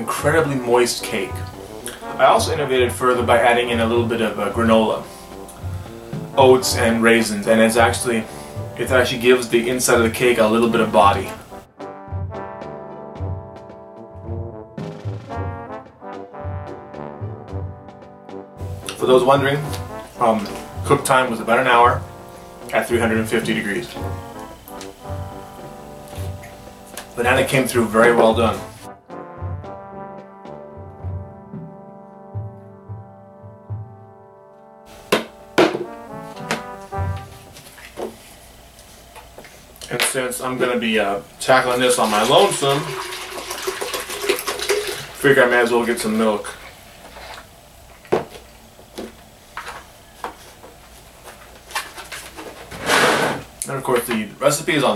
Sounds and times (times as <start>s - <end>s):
Speech: 0.0s - 1.5s, 2.2s - 5.1s, 6.4s - 11.4s, 18.9s - 22.0s, 22.7s - 24.0s, 27.2s - 28.8s, 39.8s - 43.0s, 45.2s - 46.6s, 53.6s - 54.9s.